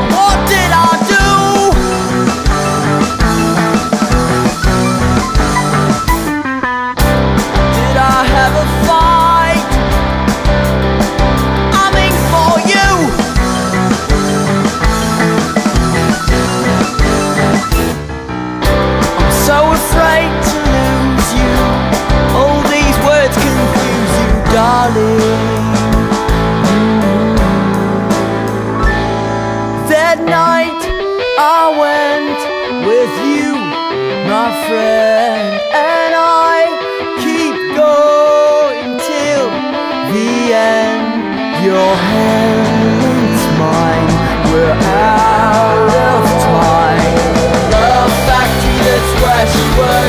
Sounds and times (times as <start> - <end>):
Music: 0.0 - 50.0.